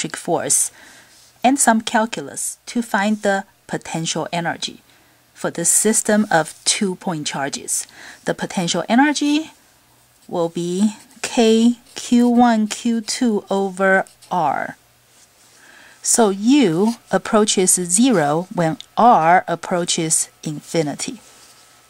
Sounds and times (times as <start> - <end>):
Speech: 0.0 - 0.8, 1.4 - 4.8, 5.4 - 9.6, 10.3 - 14.8, 16.0 - 21.3.